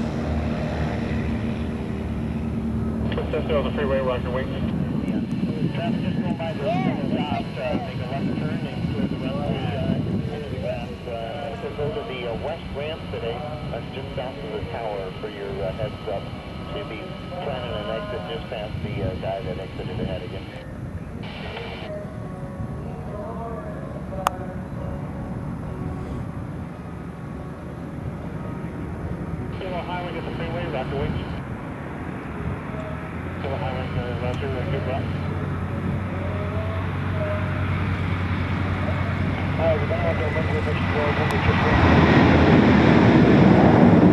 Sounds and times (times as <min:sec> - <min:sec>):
Field recording: 0:00.0 - 0:44.1
Fixed-wing aircraft, airplane: 0:00.0 - 0:44.1
Propeller, airscrew: 0:00.0 - 0:44.1
Speech: 0:03.1 - 0:20.6, 0:29.6 - 0:31.4, 0:32.7 - 0:35.3, 0:38.8 - 0:42.0.